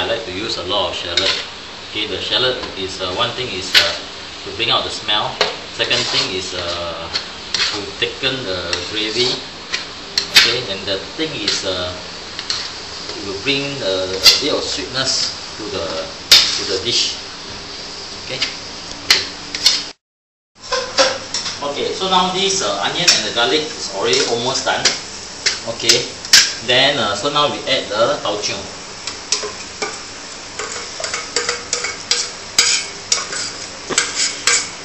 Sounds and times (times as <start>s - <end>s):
Speech: 0.0s - 9.4s, 10.4s - 12.0s, 13.1s - 17.2s, 18.3s - 18.6s, 21.6s - 25.0s, 25.6s - 28.8s
Dishes, pots, and pans: 20.7s - 21.6s.